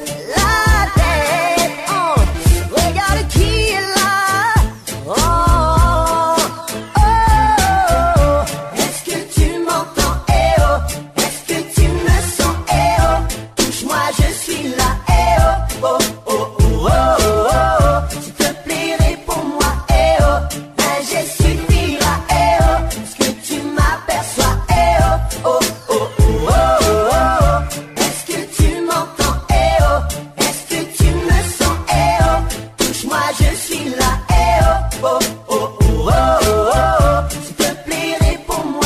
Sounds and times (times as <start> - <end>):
Music: 0.0 - 38.8.